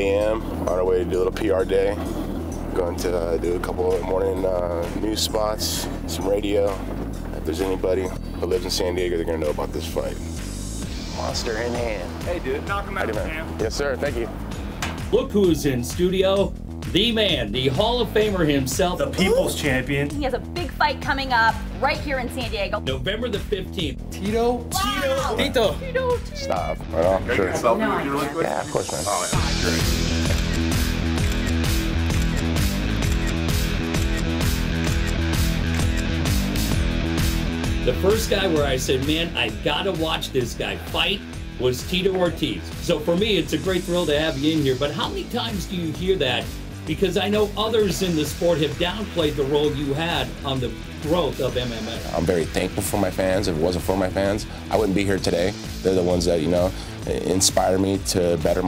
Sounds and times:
Music: 0.0s - 58.6s.

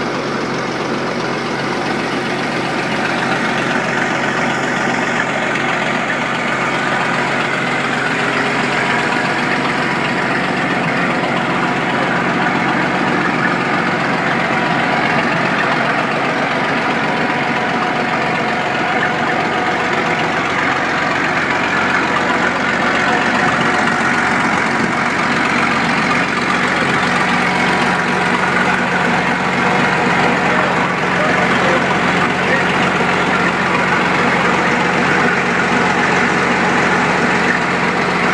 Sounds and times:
Heavy engine (low frequency): 0.0s - 38.3s
Idling: 0.0s - 38.3s
Truck: 0.0s - 38.3s.

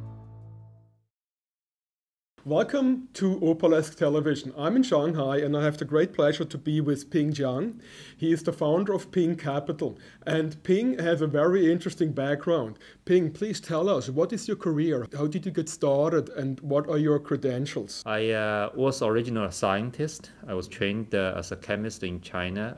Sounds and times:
Speech: 2.4s - 22.7s.

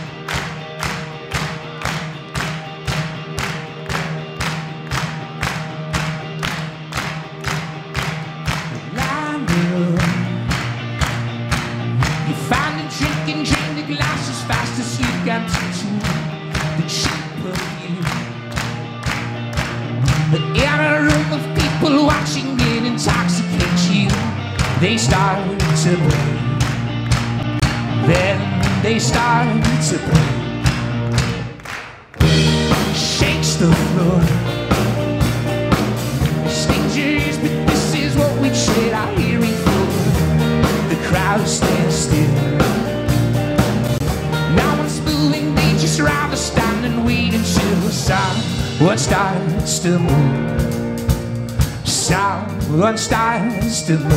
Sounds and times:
Music: 0.0s - 54.1s.

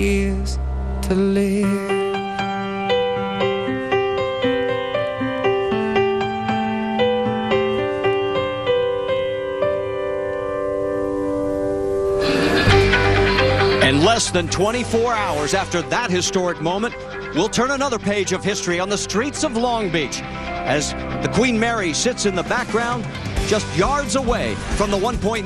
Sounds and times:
Music: 0.0s - 25.4s.

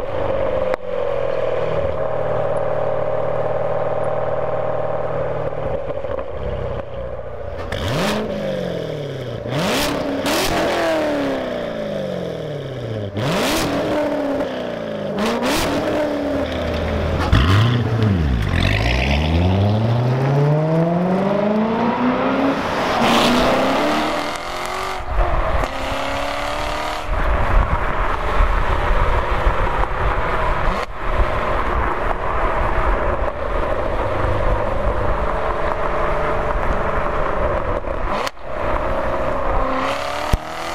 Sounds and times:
Car: 0.0s - 40.7s.

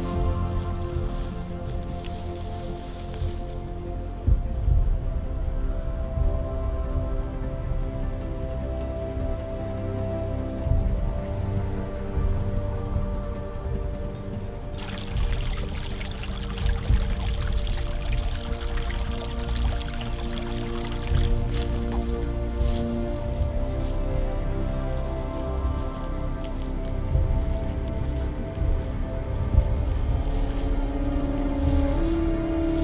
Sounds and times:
Music: 0.0s - 32.8s
Pour: 14.8s - 21.9s.

